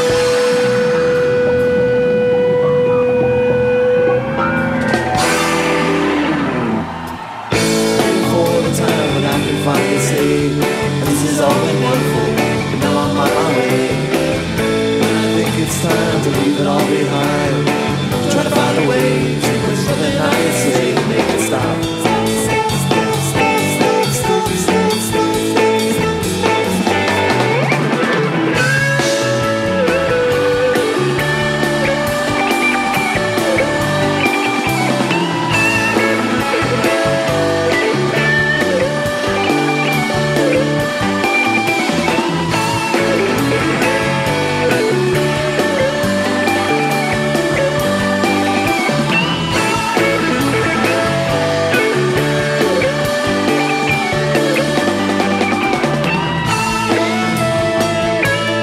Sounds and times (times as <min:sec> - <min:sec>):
Blues: 0:00.0 - 0:58.6
Singing: 0:07.5 - 0:27.8, 0:28.6 - 0:57.4.